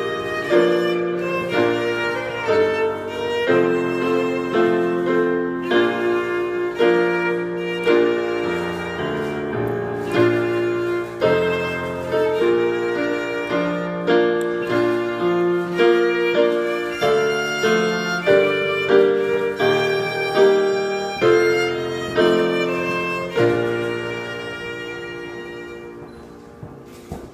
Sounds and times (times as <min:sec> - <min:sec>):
Violin, fiddle: 0:00.0 - 0:27.3.